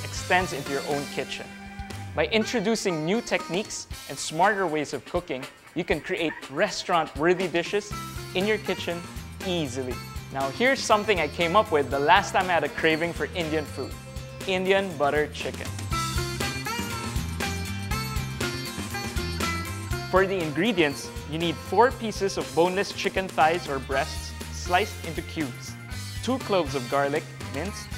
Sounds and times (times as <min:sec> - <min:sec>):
Music: 0:00.0 - 0:27.9
Speech: 0:00.1 - 0:01.5, 0:02.2 - 0:13.9, 0:14.5 - 0:15.7, 0:20.1 - 0:27.9.